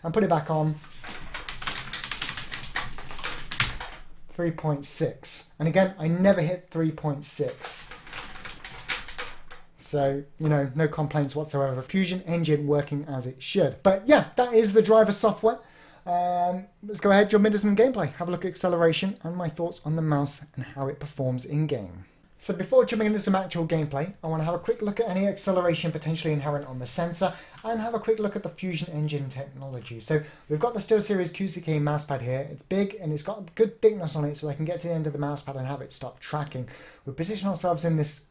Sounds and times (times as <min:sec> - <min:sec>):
Speech: 0:00.0 - 0:00.8, 0:04.3 - 0:07.9, 0:09.8 - 0:38.3
Inside, small room: 0:00.0 - 0:38.3.